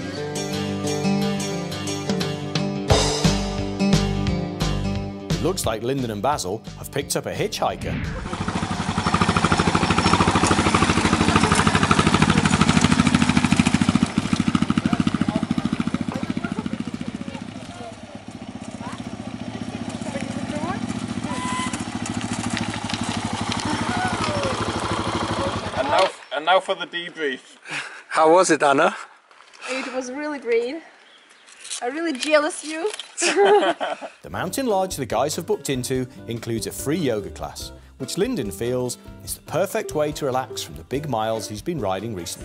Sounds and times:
Outside, rural or natural: 0:07.8 - 0:34.2
Motorcycle: 0:07.9 - 0:26.3.

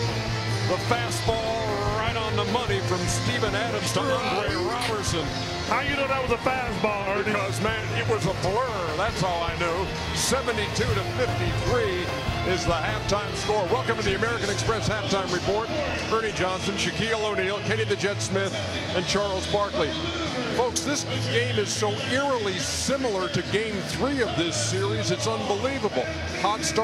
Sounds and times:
Music: 0:00.0 - 0:26.8
Speech: 0:00.7 - 0:26.8.

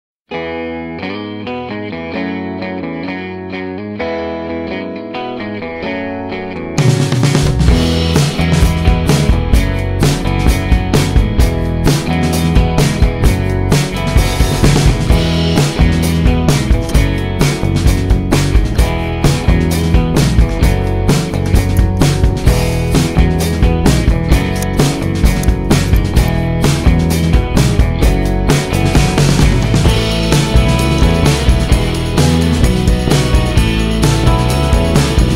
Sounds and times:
Effects unit: 0:00.3 - 0:35.3.

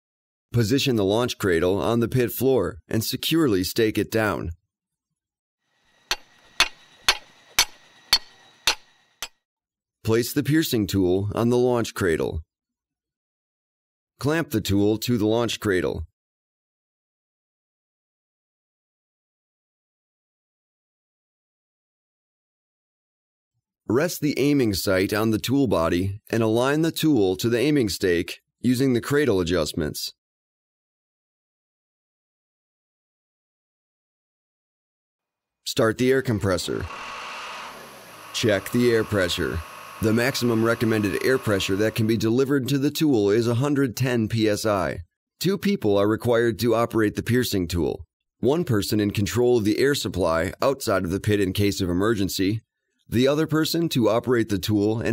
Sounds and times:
Speech: 0:00.5 - 0:04.6, 0:10.0 - 0:12.5, 0:14.2 - 0:16.1, 0:23.9 - 0:30.2, 0:35.7 - 0:36.9, 0:38.4 - 0:55.1.

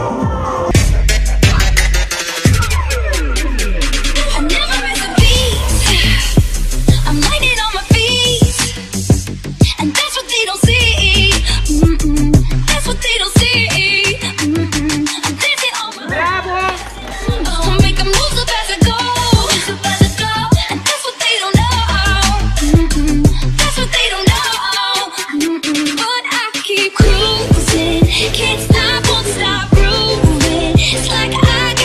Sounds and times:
Pop music: 0:00.0 - 0:31.8
Speech: 0:15.4 - 0:18.9.

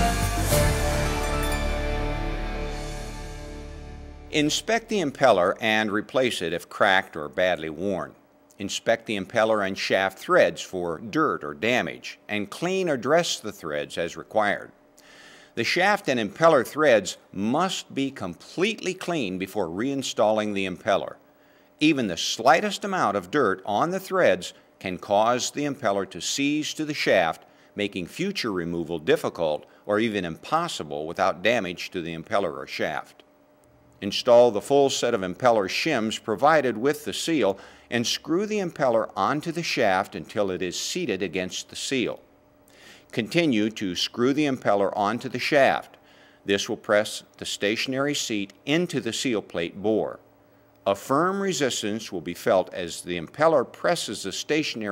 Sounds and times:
Speech: 0:04.3 - 0:14.8, 0:15.6 - 0:21.2, 0:21.8 - 0:33.2, 0:34.0 - 0:42.2, 0:43.1 - 0:50.2, 0:50.9 - 0:54.9.

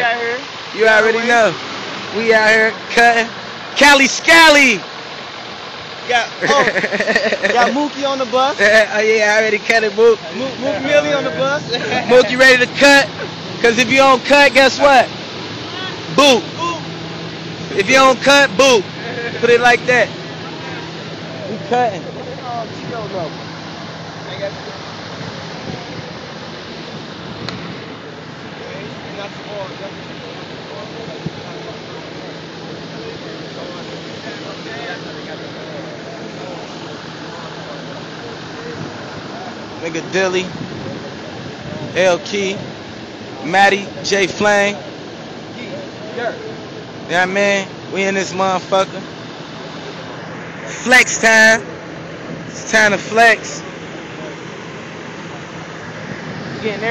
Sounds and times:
Bus: 0:00.0 - 0:56.9.

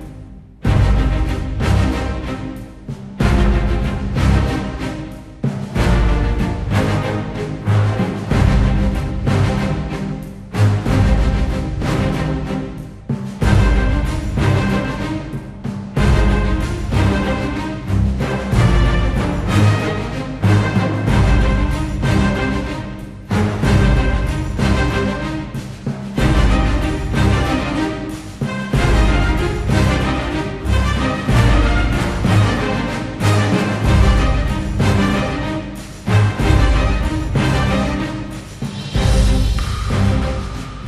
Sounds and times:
Music: 0:00.0 - 0:40.8.

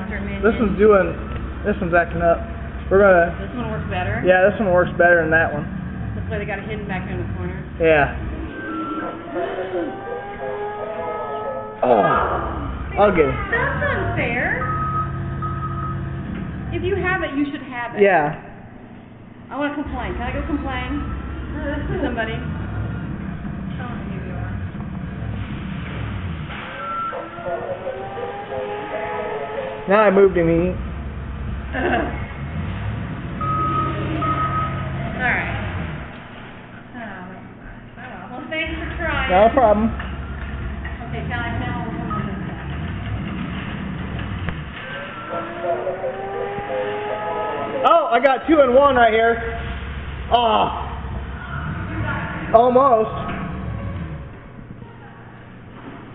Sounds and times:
Reversing beeps: 0:14.4 - 0:16.2, 0:20.8 - 0:21.4, 0:26.8 - 0:27.4, 0:33.4 - 0:35.0, 0:42.0 - 0:42.7.

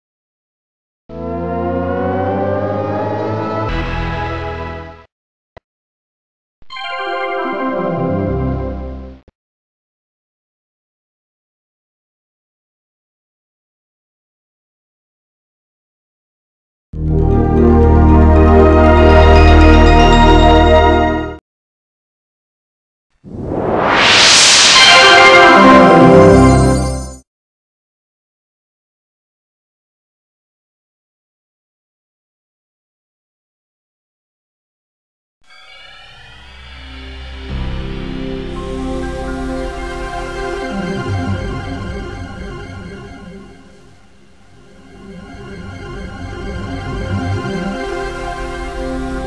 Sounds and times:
Music: 0:01.2 - 0:05.1, 0:06.7 - 0:09.3, 0:17.0 - 0:21.4, 0:24.8 - 0:27.2, 0:35.5 - 0:49.2
Sound effect: 0:01.2 - 0:05.1, 0:06.7 - 0:09.3, 0:23.2 - 0:27.2, 0:35.5 - 0:49.2.

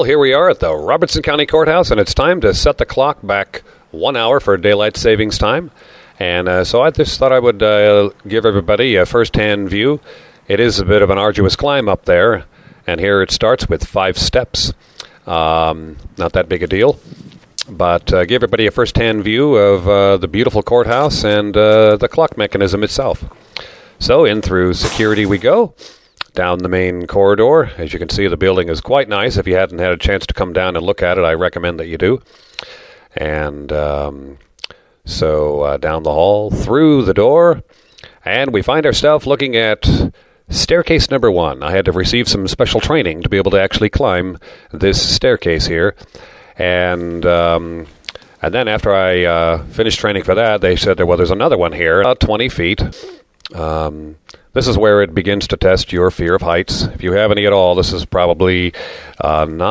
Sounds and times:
Speech: 0:00.0 - 0:17.0, 0:17.6 - 0:23.4, 0:24.0 - 0:32.2, 0:33.2 - 0:46.0, 0:46.6 - 0:59.7.

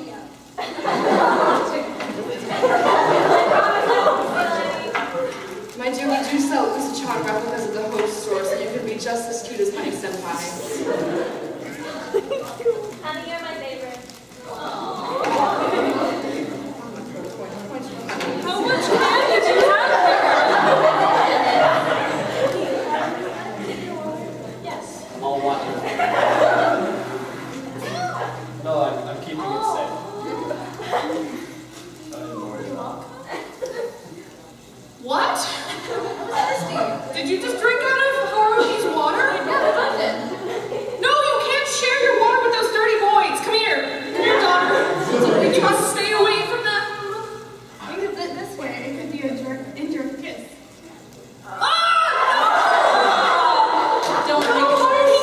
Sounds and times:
Chatter: 0:00.0 - 0:55.2
Inside, large room or hall: 0:00.0 - 0:55.2.

